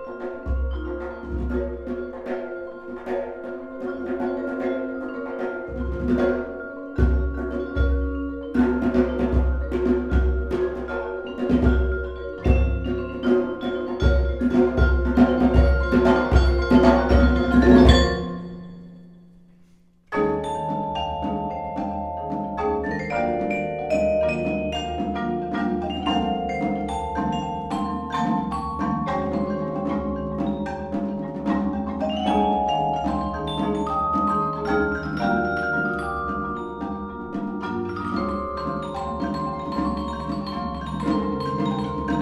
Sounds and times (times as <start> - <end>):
Glockenspiel: 0.0 - 19.5, 20.1 - 42.2
Marimba, xylophone: 0.0 - 19.5, 20.1 - 42.2.